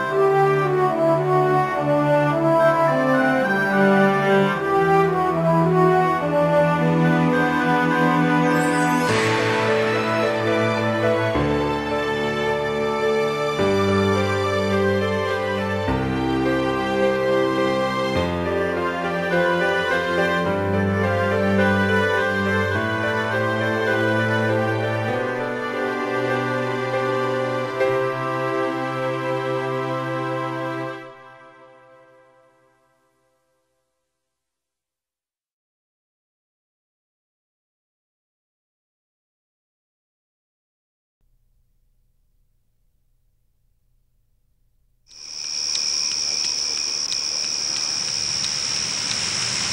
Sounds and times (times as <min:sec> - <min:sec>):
Music: 0:00.0 - 0:35.0.